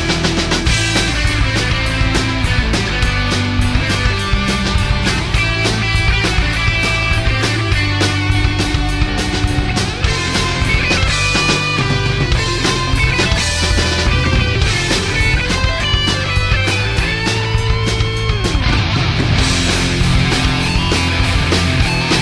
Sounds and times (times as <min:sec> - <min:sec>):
Bass guitar: 0:00.0 - 0:22.2
Electric guitar: 0:00.0 - 0:22.2.